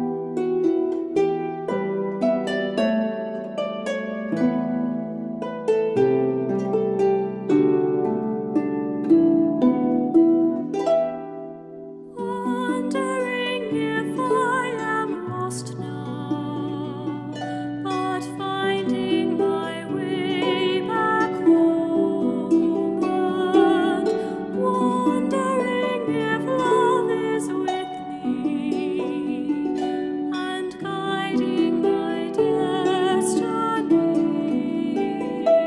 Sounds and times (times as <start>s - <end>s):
Harp: 0.0s - 35.6s
Singing: 12.2s - 35.6s.